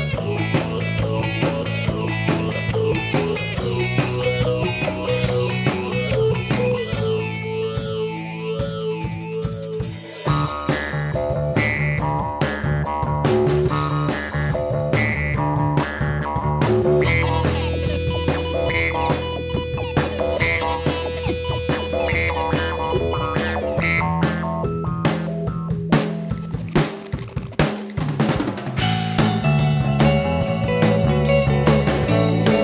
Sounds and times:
Guitar: 0.0 - 32.6.

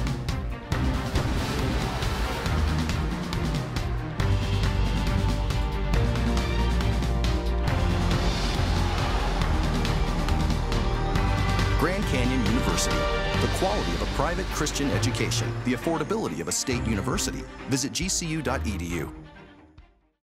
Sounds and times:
Music: 0.0 - 20.2
Speech: 11.8 - 19.2.

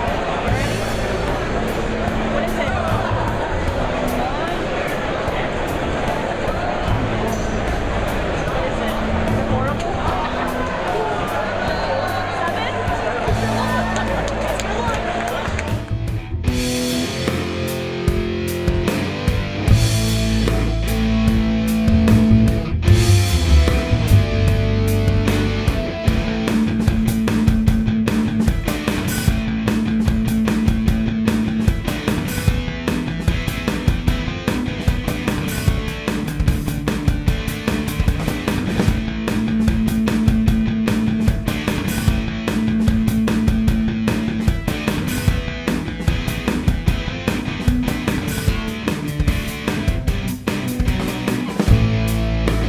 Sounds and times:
Music: 0.0 - 52.6
Speech: 0.1 - 15.7.

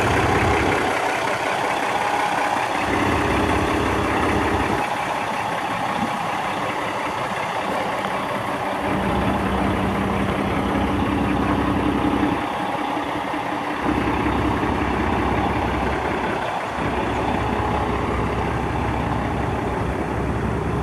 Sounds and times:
Outside, rural or natural: 0.0 - 20.8
Truck: 0.0 - 20.8.

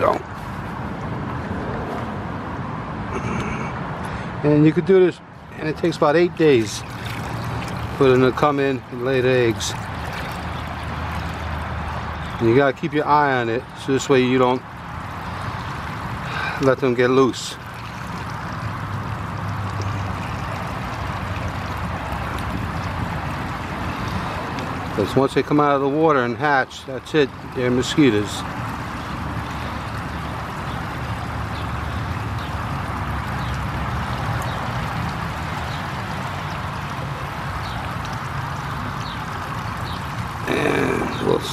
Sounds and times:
Speech: 0.0 - 0.2, 4.4 - 6.8, 8.0 - 9.8, 12.4 - 14.6, 16.6 - 17.6, 25.0 - 28.5, 40.5 - 41.5.

